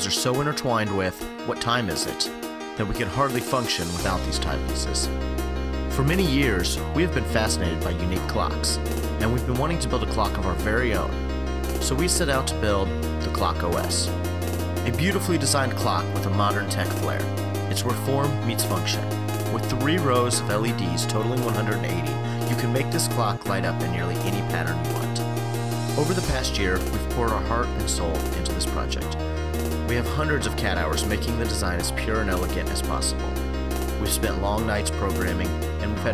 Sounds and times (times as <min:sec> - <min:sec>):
Speech: 0:00.0 - 0:05.1, 0:06.0 - 0:11.2, 0:11.8 - 0:14.1, 0:14.9 - 0:25.2, 0:26.0 - 0:29.2, 0:29.9 - 0:33.3, 0:34.0 - 0:36.1
Music: 0:00.0 - 0:36.1.